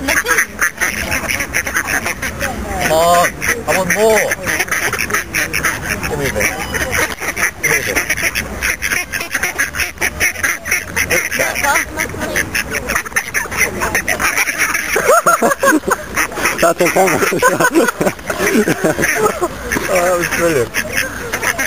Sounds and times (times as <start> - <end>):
Quack: 0.0 - 21.6.